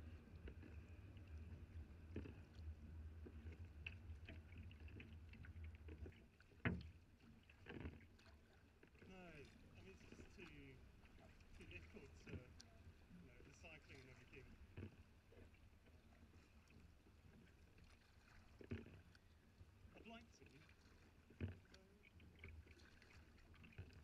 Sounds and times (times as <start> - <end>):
Rowboat, canoe, kayak: 0.0 - 24.0.